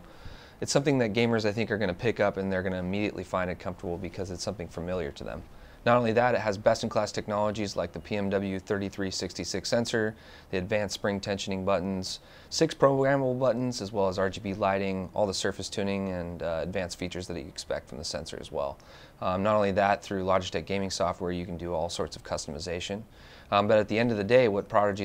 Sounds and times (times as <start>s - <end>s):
Speech: 0.6s - 25.0s.